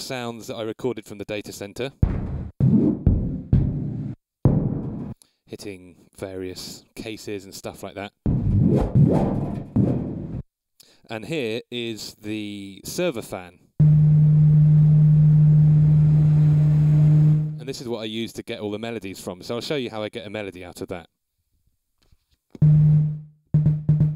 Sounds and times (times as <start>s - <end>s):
Speech: 0.0s - 2.0s, 5.5s - 8.2s, 11.1s - 13.6s, 17.6s - 21.1s.